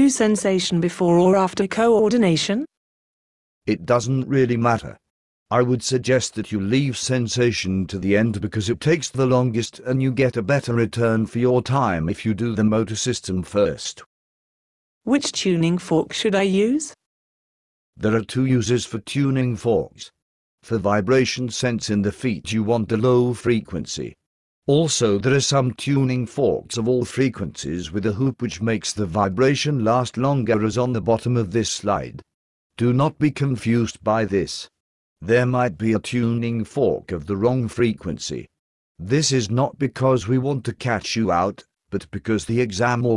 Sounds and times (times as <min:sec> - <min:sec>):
Speech: 0:00.0 - 0:02.7, 0:03.7 - 0:14.1, 0:15.1 - 0:17.0, 0:18.0 - 0:43.1.